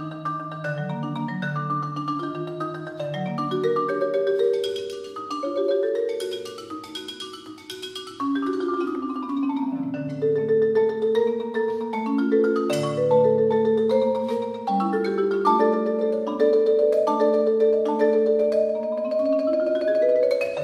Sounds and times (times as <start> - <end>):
Marimba, xylophone: 0.0 - 20.6.